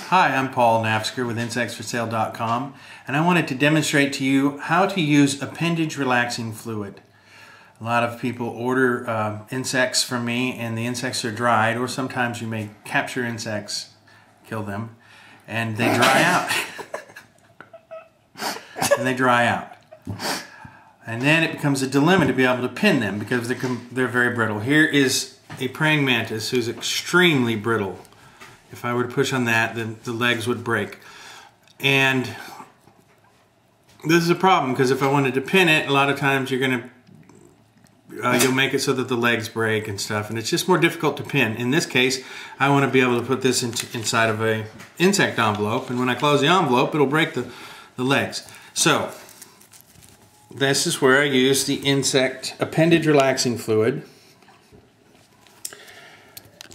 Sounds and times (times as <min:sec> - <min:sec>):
Speech: 0:00.0 - 0:07.0, 0:07.8 - 0:16.6, 0:18.9 - 0:19.8, 0:21.0 - 0:28.1, 0:28.7 - 0:31.0, 0:31.8 - 0:32.6, 0:34.0 - 0:37.0, 0:38.1 - 0:49.2, 0:50.6 - 0:54.1.